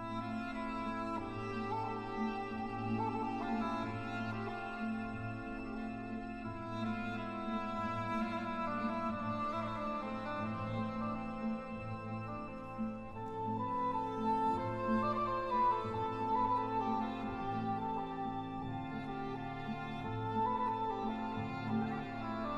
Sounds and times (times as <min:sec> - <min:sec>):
Cello: 0:00.0 - 0:22.5.